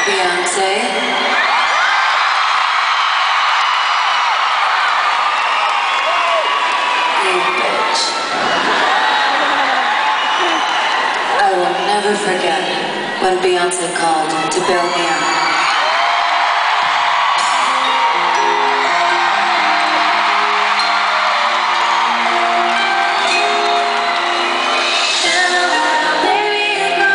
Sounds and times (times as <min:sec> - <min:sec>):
Speech: 0:00.0 - 0:01.1, 0:11.4 - 0:15.3.